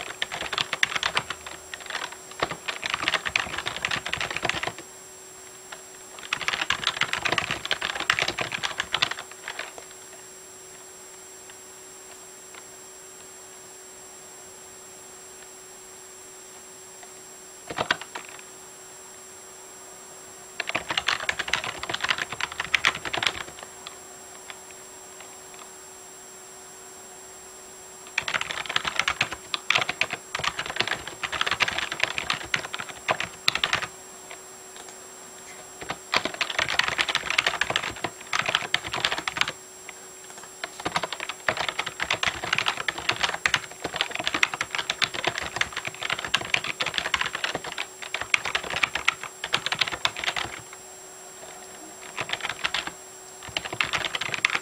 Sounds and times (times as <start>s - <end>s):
Computer keyboard: 0.0s - 4.8s, 5.7s - 10.0s, 17.7s - 18.4s, 20.6s - 24.0s, 28.1s - 35.0s, 35.8s - 39.6s, 40.2s - 50.7s, 52.0s - 54.6s.